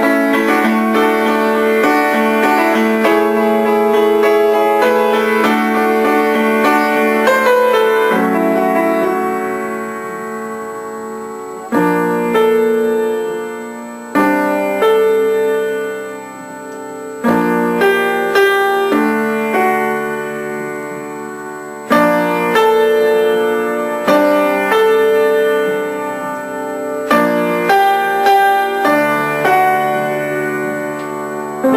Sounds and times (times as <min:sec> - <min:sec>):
Music: 0:00.0 - 0:31.7.